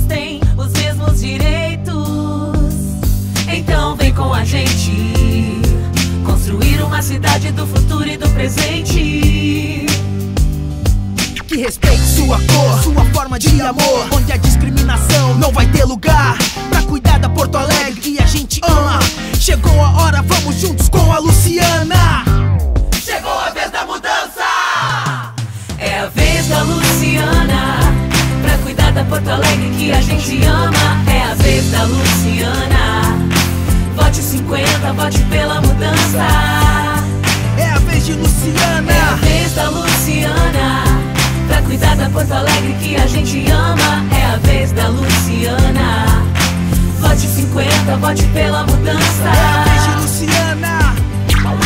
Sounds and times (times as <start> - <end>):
Pop music: 0.0 - 51.6.